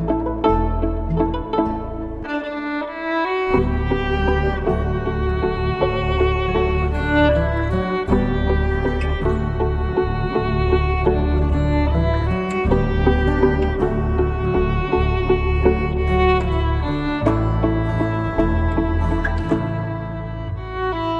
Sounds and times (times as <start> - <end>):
Pizzicato: 0.0 - 21.1.